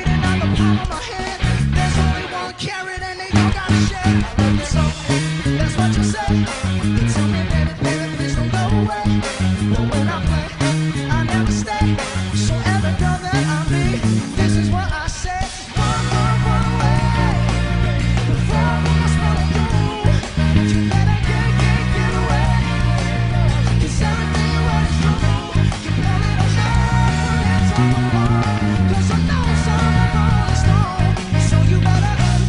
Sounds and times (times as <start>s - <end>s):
Song: 0.0s - 15.0s, 15.6s - 32.4s
Bass guitar: 0.0s - 32.4s.